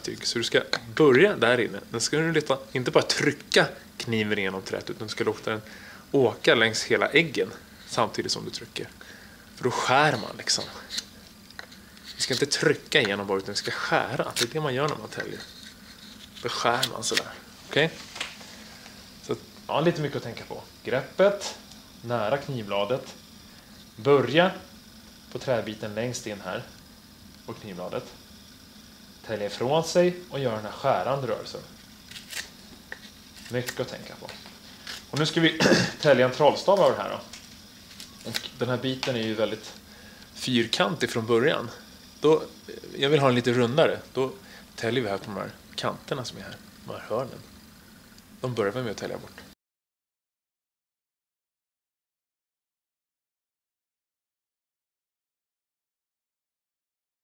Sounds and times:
Speech: 0.0s - 9.0s, 9.6s - 11.0s, 12.2s - 15.5s, 16.4s - 18.0s, 19.2s - 23.2s, 24.0s - 24.7s, 25.3s - 26.7s, 27.5s - 28.2s, 29.2s - 31.7s, 33.5s - 34.4s, 35.1s - 37.3s, 38.2s - 39.8s, 40.4s - 47.5s, 48.4s - 49.6s.

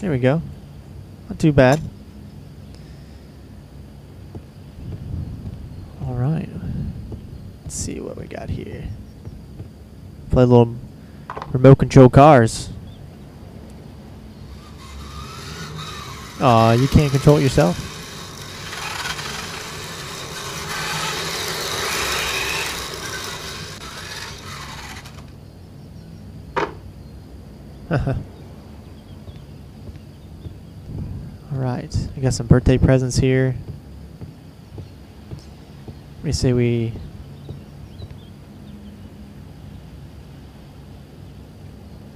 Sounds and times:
Speech: 0.0s - 0.5s, 1.3s - 1.9s, 6.0s - 6.7s, 7.7s - 8.9s, 10.3s - 10.8s, 11.5s - 12.8s, 16.4s - 17.8s, 31.4s - 33.6s, 36.2s - 37.0s.

